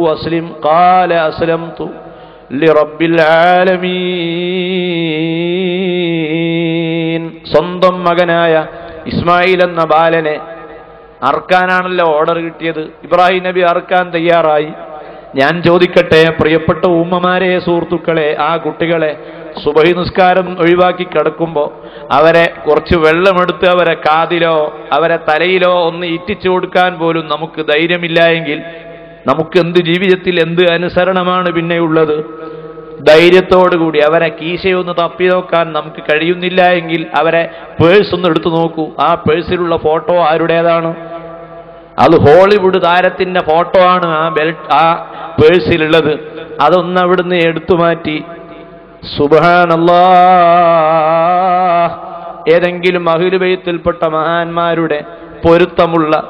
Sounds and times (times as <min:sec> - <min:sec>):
Male speech, man speaking: 0:00.0 - 0:10.5, 0:11.2 - 0:14.8, 0:15.4 - 0:28.7, 0:29.3 - 0:32.3, 0:33.0 - 0:41.0, 0:42.0 - 0:48.3, 0:49.0 - 0:56.2
Narration, monologue: 0:00.0 - 0:56.2.